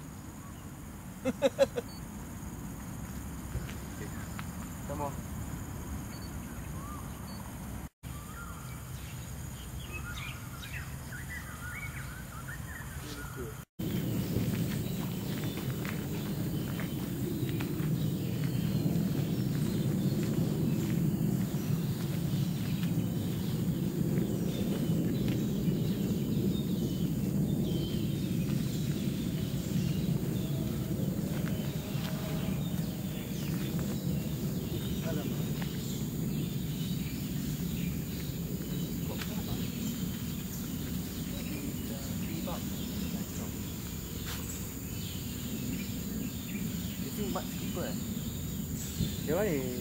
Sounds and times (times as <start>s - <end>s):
Speech: 4.0s - 4.3s, 4.9s - 5.2s, 35.0s - 35.5s, 39.0s - 39.8s, 41.3s - 43.6s, 47.0s - 48.0s, 49.2s - 49.8s.